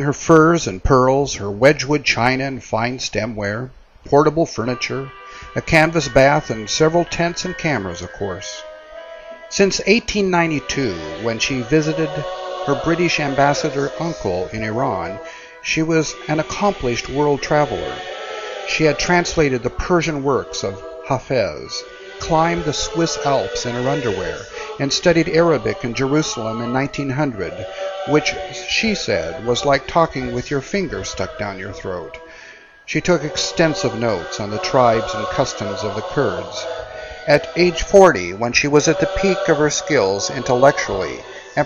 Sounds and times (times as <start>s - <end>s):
Speech: 0.0s - 8.6s, 9.5s - 18.0s, 18.7s - 32.3s, 32.9s - 41.6s.